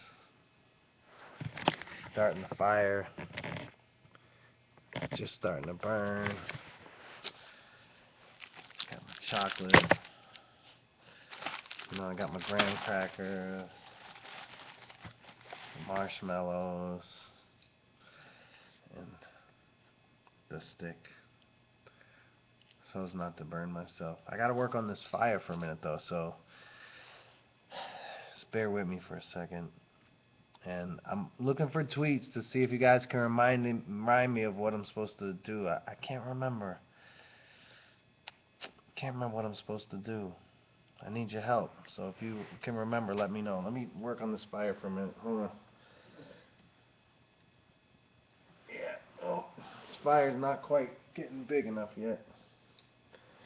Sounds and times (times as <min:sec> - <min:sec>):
Speech: 0:02.2 - 0:03.2, 0:05.0 - 0:06.5, 0:08.9 - 0:09.9, 0:11.9 - 0:14.0, 0:15.8 - 0:17.5, 0:18.9 - 0:19.4, 0:20.5 - 0:21.2, 0:22.8 - 0:26.4, 0:28.4 - 0:29.8, 0:30.6 - 0:36.8, 0:39.0 - 0:40.4, 0:41.0 - 0:45.6, 0:48.7 - 0:52.4.